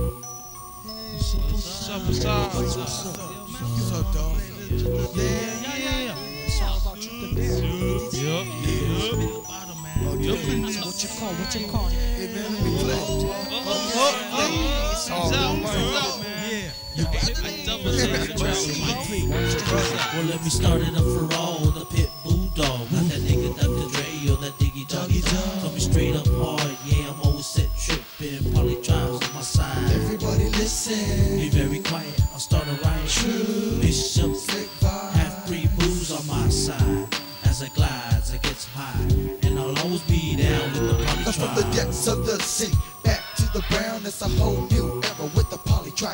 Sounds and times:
Background music: 0:00.0 - 0:46.1
Dance music: 0:01.1 - 0:46.1.

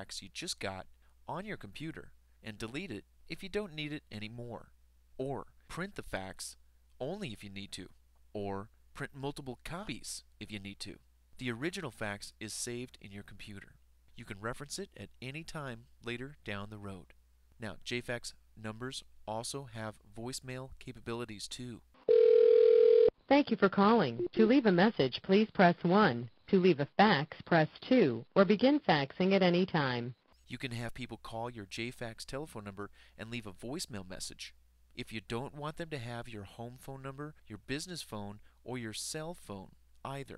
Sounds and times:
Speech: 0:00.0 - 0:21.8, 0:23.3 - 0:40.3.

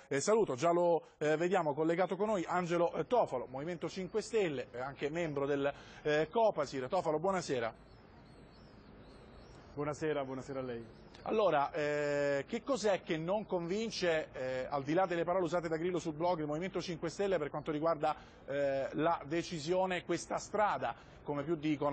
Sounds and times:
Speech: 0:00.0 - 0:07.8, 0:09.8 - 0:21.9.

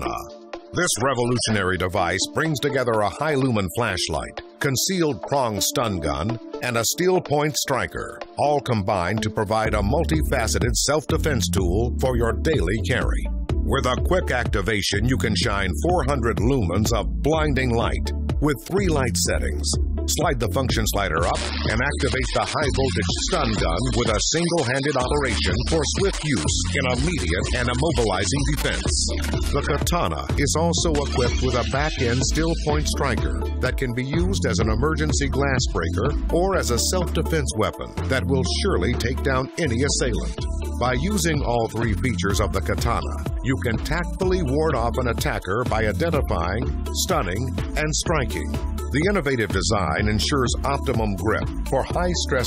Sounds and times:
Music: 0:00.0 - 0:52.4
Speech: 0:00.0 - 0:52.4.

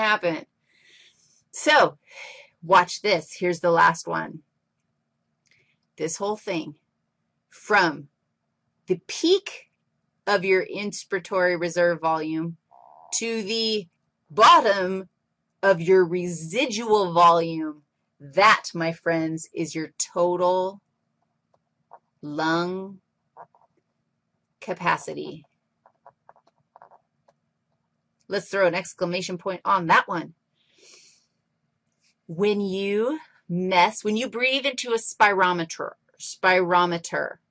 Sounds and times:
Speech: 0:00.0 - 0:00.4, 0:01.6 - 0:04.4, 0:06.0 - 0:06.8, 0:07.6 - 0:08.1, 0:08.9 - 0:09.6, 0:10.3 - 0:20.8, 0:22.2 - 0:23.0, 0:24.6 - 0:25.4, 0:28.3 - 0:30.3, 0:32.3 - 0:37.4
Breathing: 0:00.6 - 0:02.6, 0:05.5 - 0:05.9, 0:30.5 - 0:32.2.

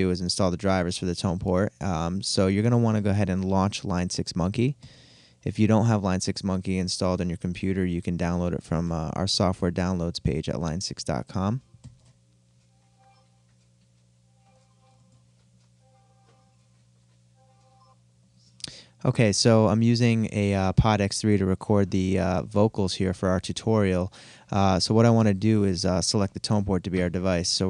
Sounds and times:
Speech: 0:00.0 - 0:04.8, 0:05.4 - 0:11.6, 0:18.7 - 0:27.7.

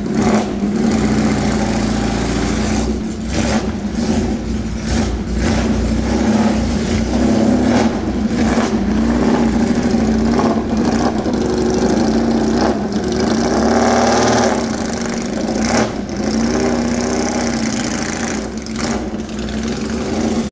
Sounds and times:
Car: 0:00.0 - 0:20.5.

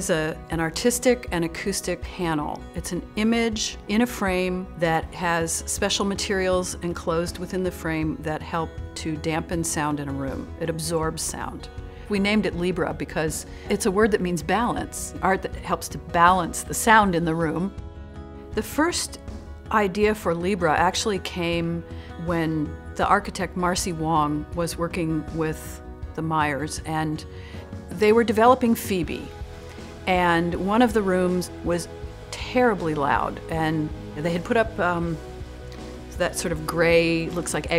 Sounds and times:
Speech: 0:00.0 - 0:17.7, 0:18.6 - 0:27.3, 0:27.9 - 0:29.3, 0:30.1 - 0:35.2, 0:36.2 - 0:37.7
Music: 0:00.0 - 0:37.7.

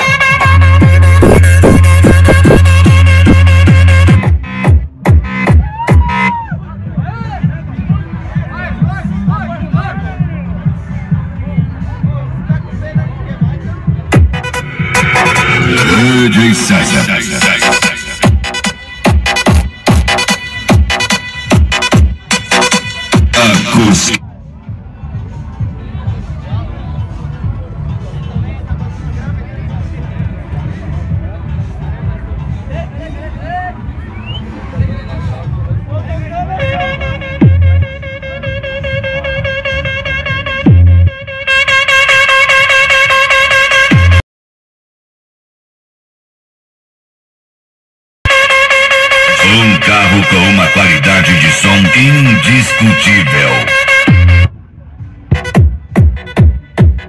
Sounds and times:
Music: 0:00.0 - 0:44.2, 0:48.3 - 0:57.0
Speech: 0:06.6 - 0:14.1, 0:15.8 - 0:17.5, 0:23.4 - 0:33.9, 0:34.6 - 0:37.1, 0:49.4 - 0:53.7.

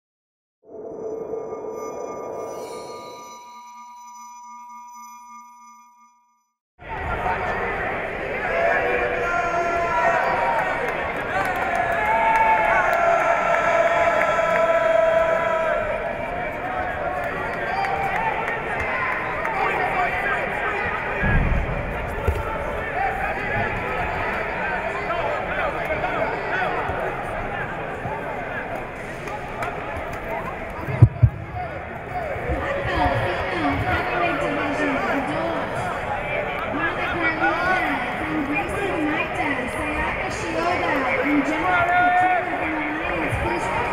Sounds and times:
Inside, large room or hall: 0:06.8 - 0:43.9.

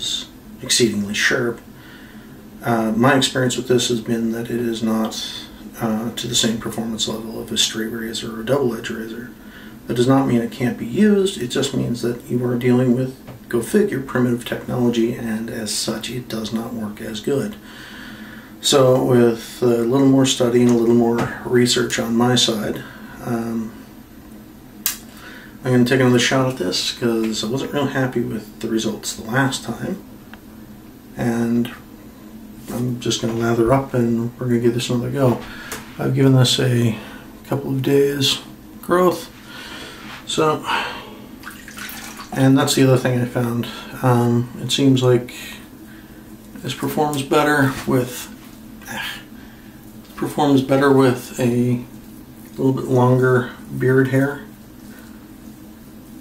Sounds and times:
Speech: 0:00.0 - 0:01.7, 0:02.6 - 0:17.7, 0:18.6 - 0:23.8, 0:25.6 - 0:30.1, 0:31.2 - 0:31.9, 0:32.6 - 0:39.4, 0:40.2 - 0:41.0, 0:42.3 - 0:45.7, 0:46.6 - 0:49.3, 0:50.1 - 0:51.9, 0:52.6 - 0:54.5.

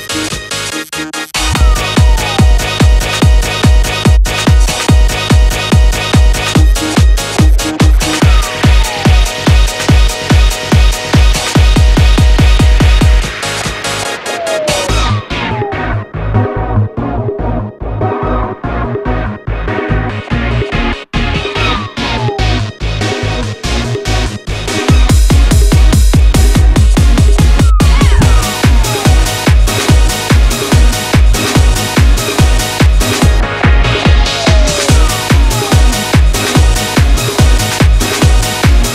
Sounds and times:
Disco: 0:00.0 - 0:38.9.

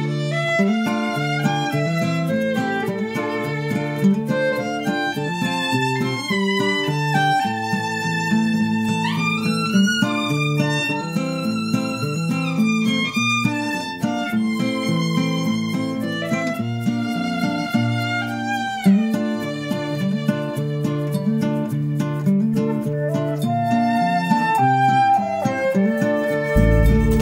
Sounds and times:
Violin, fiddle: 0:00.0 - 0:27.2.

